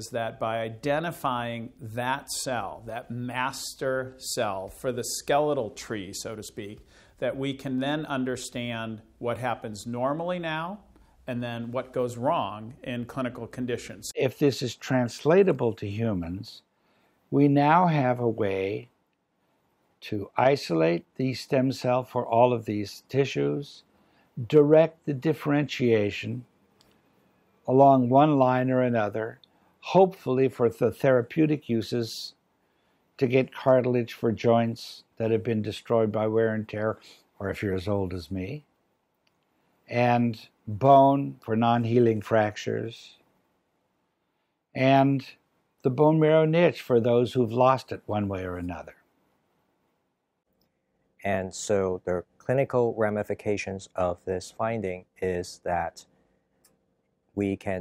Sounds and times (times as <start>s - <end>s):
Speech: 0.0s - 16.7s, 17.3s - 18.9s, 20.0s - 26.5s, 27.6s - 32.4s, 33.2s - 38.7s, 39.9s - 43.2s, 44.7s - 49.1s, 51.2s - 56.1s, 57.4s - 57.8s.